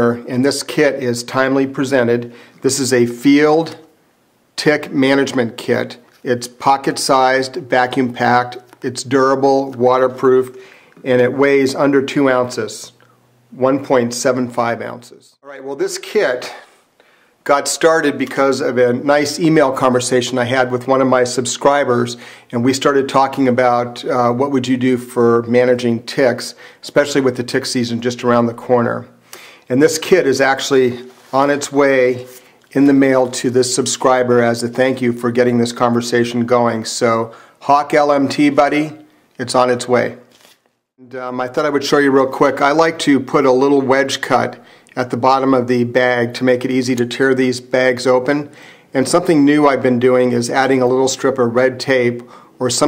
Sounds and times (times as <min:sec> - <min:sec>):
Speech: 0:00.0 - 0:03.9, 0:04.6 - 0:16.8, 0:17.4 - 0:40.3, 0:41.0 - 0:52.8.